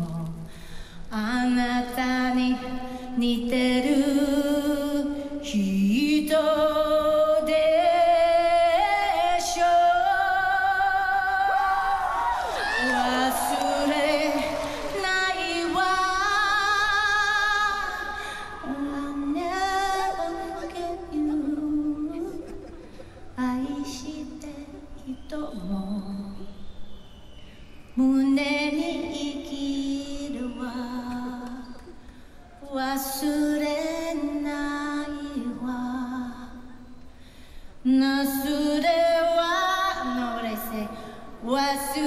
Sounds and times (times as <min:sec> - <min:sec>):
Female singing: 0:01.1 - 0:22.6, 0:23.4 - 0:26.6, 0:28.0 - 0:32.0, 0:32.6 - 0:36.9, 0:37.9 - 0:42.0.